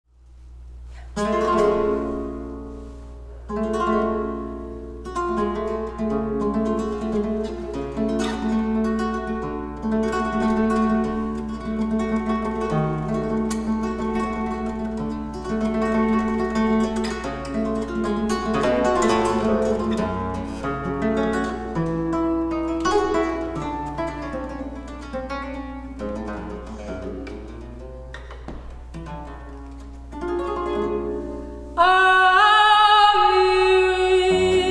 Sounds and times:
Guitar: 0.2 - 34.7
Bowed string instrument: 1.1 - 34.7.

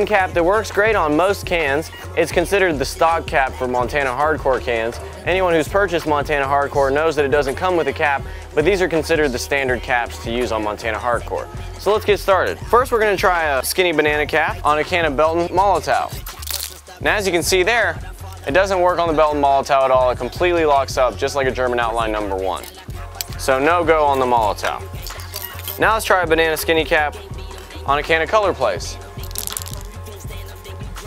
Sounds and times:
Speech: 0.0 - 16.2, 17.0 - 22.7, 23.4 - 24.9, 25.8 - 27.2, 27.9 - 29.0
Music: 0.0 - 31.0.

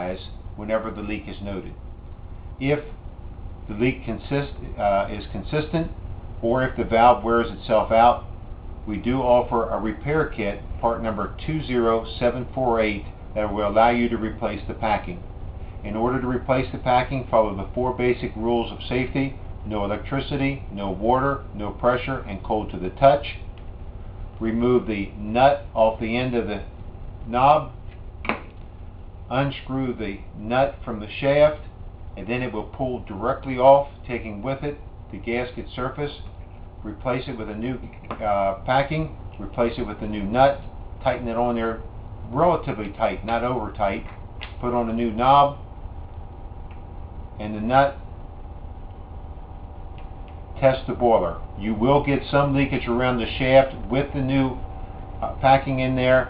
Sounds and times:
Speech: 0.0 - 1.8, 2.6 - 3.0, 3.7 - 23.5, 24.4 - 27.8, 29.3 - 45.7, 47.4 - 48.0, 50.6 - 54.6, 55.2 - 56.2.

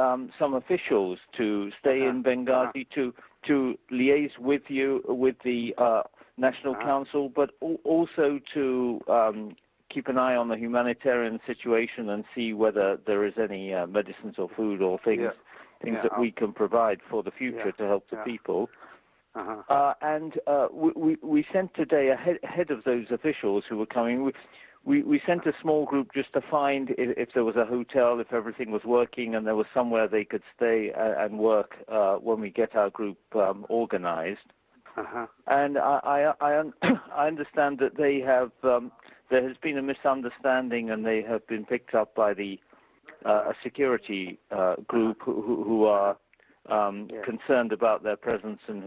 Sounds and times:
Conversation: 0.0 - 48.8.

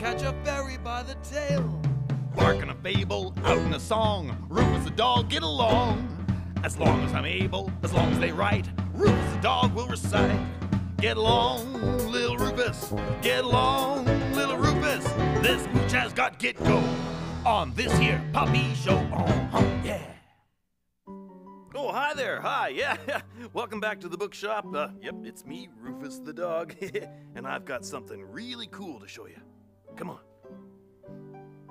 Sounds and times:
Music: 0.0 - 20.3, 21.1 - 31.7
Speech: 6.7 - 8.7, 17.5 - 20.2, 21.7 - 30.2.

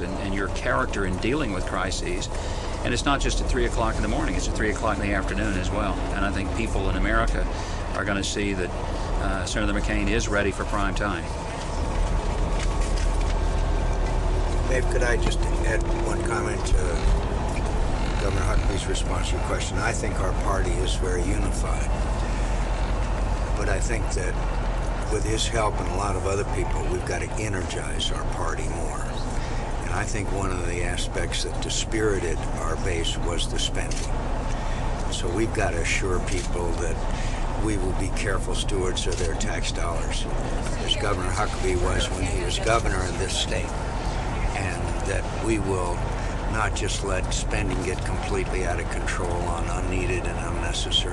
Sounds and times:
Speech: 0.0 - 11.3, 14.6 - 17.2, 18.0 - 22.0, 23.6 - 24.4, 25.1 - 34.1, 35.1 - 43.8, 44.4 - 51.1
Vehicle: 0.0 - 51.1.

